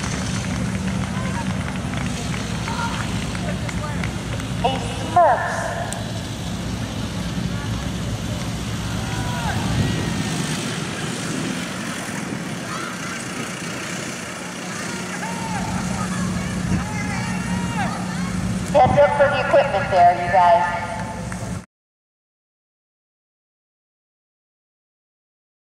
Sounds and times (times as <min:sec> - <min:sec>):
Speech: 0:02.6 - 0:06.0, 0:14.6 - 0:21.1.